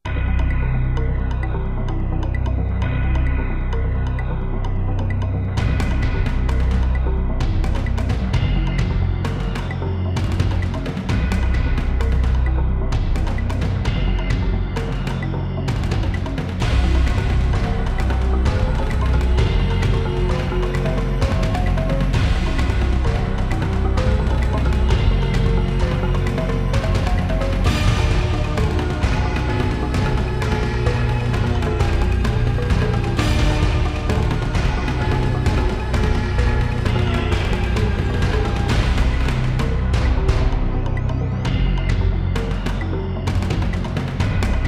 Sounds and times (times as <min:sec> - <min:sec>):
Background music: 0:00.0 - 0:44.6
Soundtrack music: 0:00.0 - 0:44.6.